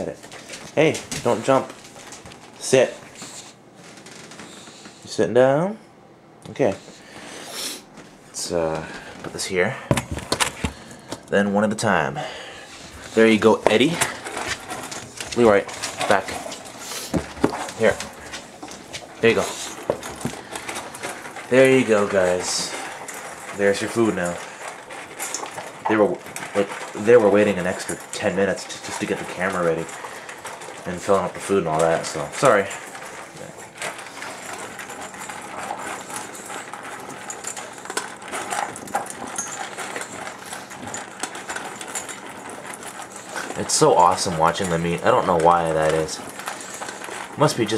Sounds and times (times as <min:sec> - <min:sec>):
Speech: 0:00.8 - 0:01.7, 0:02.6 - 0:03.0, 0:05.1 - 0:05.8, 0:06.5 - 0:06.8, 0:08.4 - 0:09.8, 0:11.3 - 0:12.2, 0:13.2 - 0:14.1, 0:15.4 - 0:16.4, 0:19.2 - 0:19.6, 0:21.5 - 0:22.8, 0:23.6 - 0:24.4, 0:25.9 - 0:29.9, 0:30.8 - 0:32.8, 0:43.6 - 0:46.3, 0:47.4 - 0:47.7.